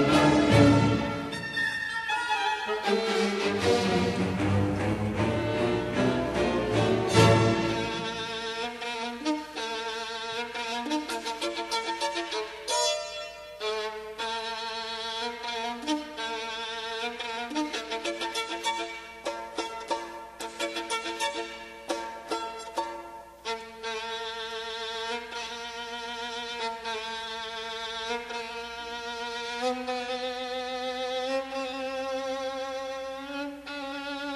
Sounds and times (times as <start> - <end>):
Pizzicato: 0.0 - 34.3.